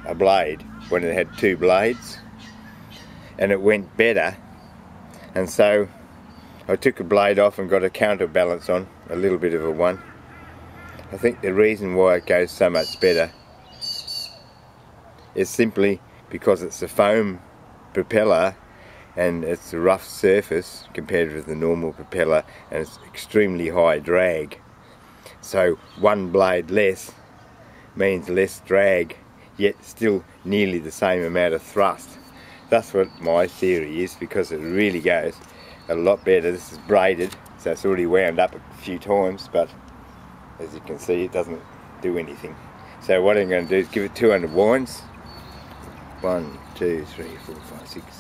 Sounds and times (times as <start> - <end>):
Speech: 0.0 - 2.2, 3.4 - 4.4, 5.3 - 6.0, 6.7 - 10.0, 11.1 - 13.3, 15.4 - 17.4, 18.0 - 18.6, 19.2 - 24.6, 25.4 - 27.2, 28.0 - 39.8, 40.6 - 45.1, 46.2 - 48.2.